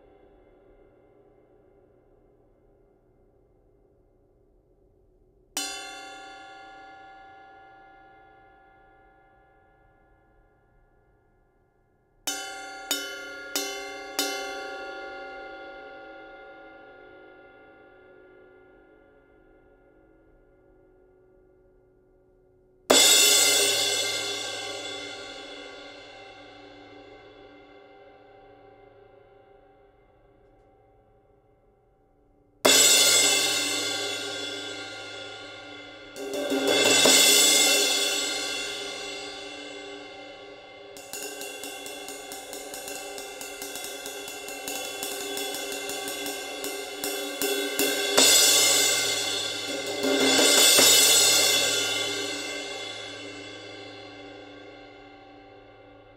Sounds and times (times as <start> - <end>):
Music: 0.0 - 56.1.